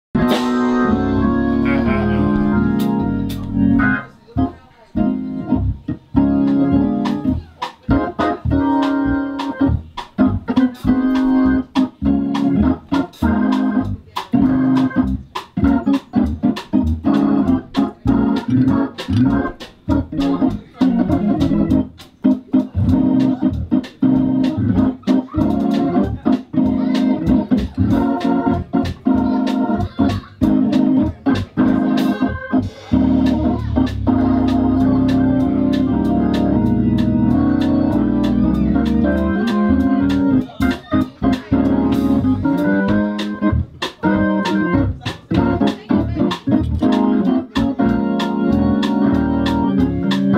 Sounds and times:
Hammond organ: 0.1s - 50.3s
Piano: 0.1s - 50.3s.

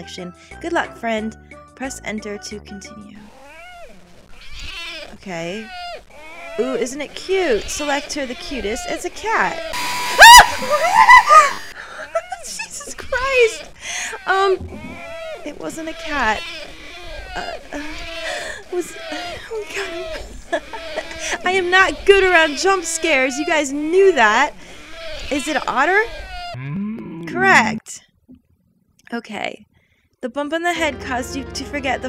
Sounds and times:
Speech: 0.0s - 3.2s, 5.1s - 5.7s, 6.6s - 9.7s, 12.0s - 14.6s, 15.5s - 16.4s, 18.7s - 20.6s, 21.2s - 24.6s, 25.3s - 26.1s, 27.3s - 28.0s, 29.1s - 29.6s, 30.2s - 32.0s.

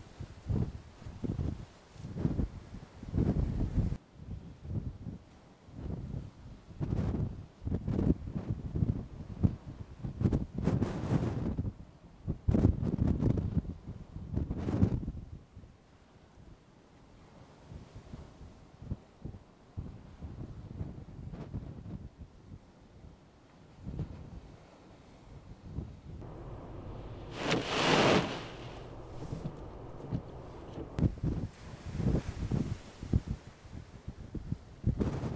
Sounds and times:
Waves, surf: 0.0s - 35.3s.

